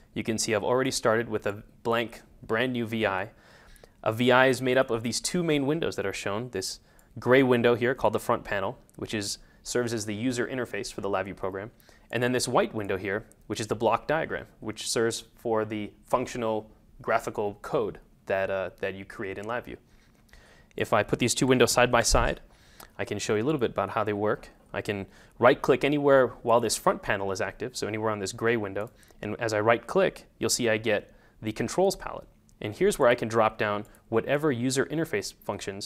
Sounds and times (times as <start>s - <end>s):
Speech: 0.2s - 3.4s, 4.0s - 19.8s, 20.8s - 35.8s.